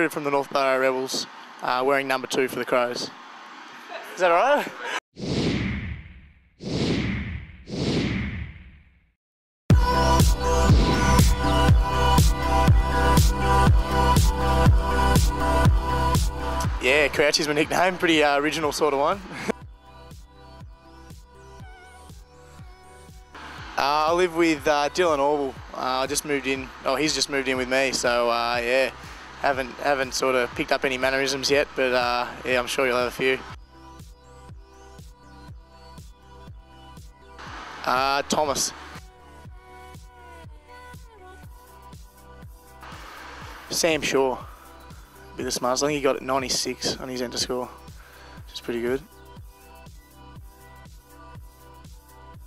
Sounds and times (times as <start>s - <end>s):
Music: 0.0s - 2.8s, 9.7s - 52.4s
Speech: 0.0s - 3.1s, 16.8s - 19.3s, 23.8s - 33.6s, 37.8s - 38.8s, 43.7s - 44.5s, 45.4s - 47.7s, 48.5s - 49.1s.